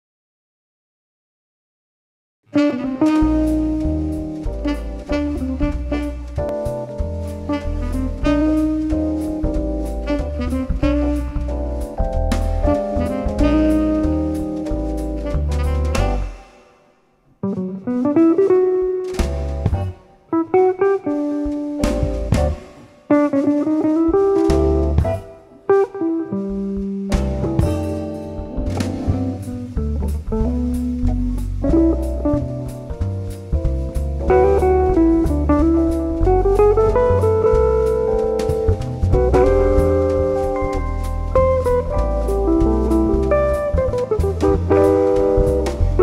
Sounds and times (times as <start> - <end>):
Guitar: 2.5 - 46.0
Jazz: 2.5 - 46.0.